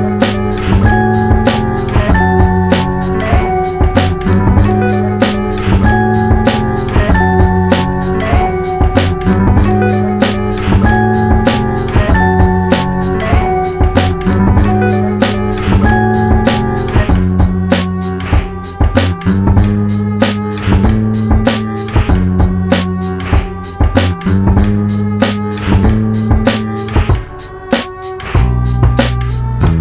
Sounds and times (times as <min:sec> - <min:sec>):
Music: 0:00.0 - 0:29.8.